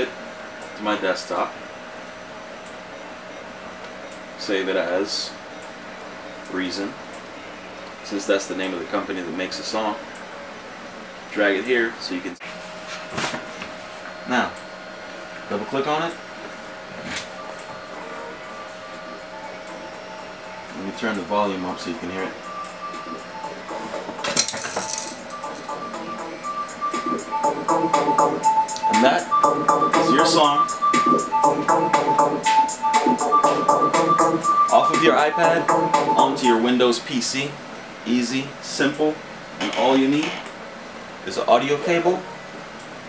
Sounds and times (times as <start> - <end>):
Speech: 0.8 - 1.6, 4.4 - 5.4, 6.5 - 7.0, 8.0 - 10.1, 11.3 - 12.4, 14.3 - 14.6, 15.5 - 16.2, 20.8 - 22.4, 34.7 - 40.4, 41.2 - 42.3
Music: 17.9 - 21.0, 22.4 - 36.7.